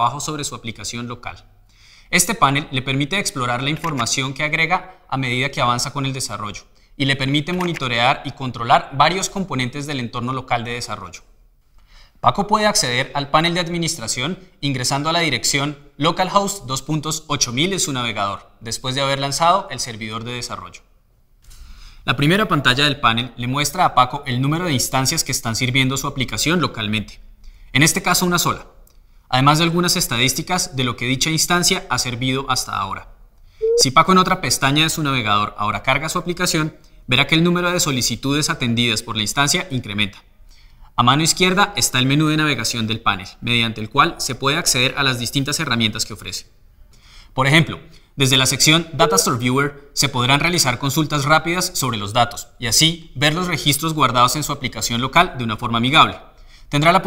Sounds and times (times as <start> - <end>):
Speech: 0.0 - 1.5, 2.1 - 11.3, 12.2 - 20.9, 22.1 - 28.7, 29.3 - 40.3, 41.0 - 46.5, 47.4 - 57.0.